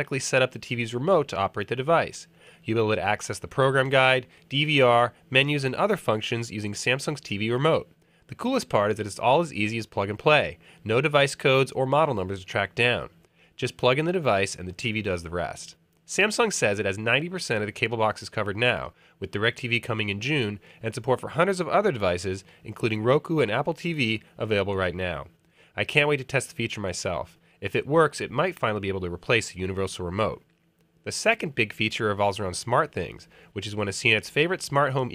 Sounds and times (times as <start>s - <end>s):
Speech: 0.0s - 35.1s.